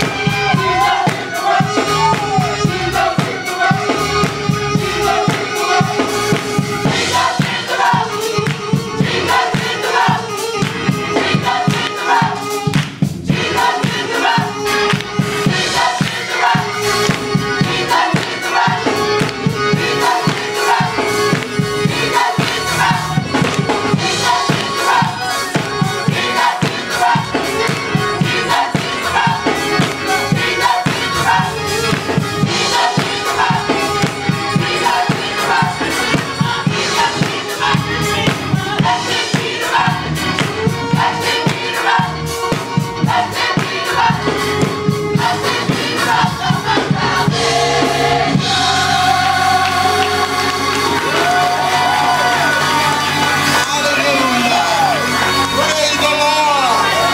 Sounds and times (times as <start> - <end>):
Choir: 0.0 - 57.1.